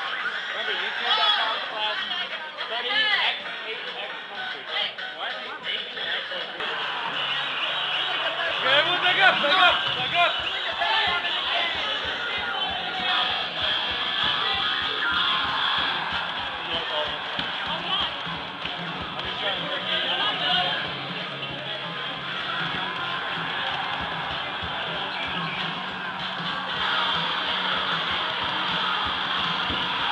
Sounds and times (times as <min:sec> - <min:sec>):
Speech: 0:08.2 - 0:15.3, 0:19.2 - 0:22.6.